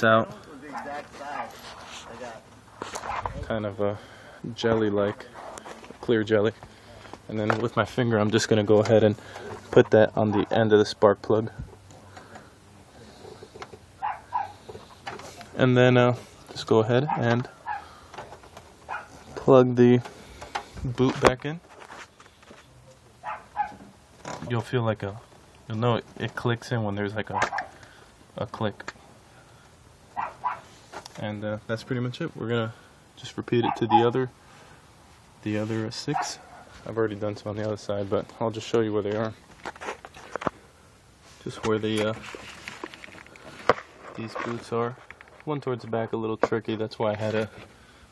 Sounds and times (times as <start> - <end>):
Speech: 0.0 - 2.5, 3.3 - 6.6, 7.3 - 11.6, 15.6 - 17.5, 20.8 - 21.6, 24.4 - 27.5, 28.4 - 28.9, 31.2 - 34.3, 35.4 - 39.4, 41.4 - 42.2, 44.2 - 47.6
Outside, urban or manmade: 0.0 - 48.1.